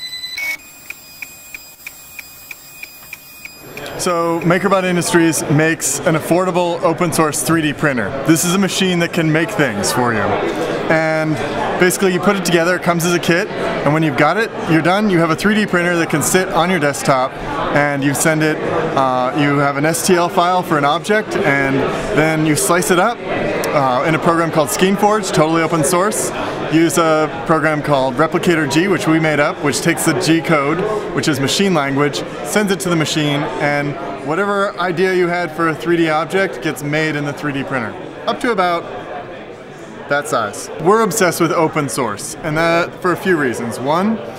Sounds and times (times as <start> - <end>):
Speech: 3.8 - 44.3.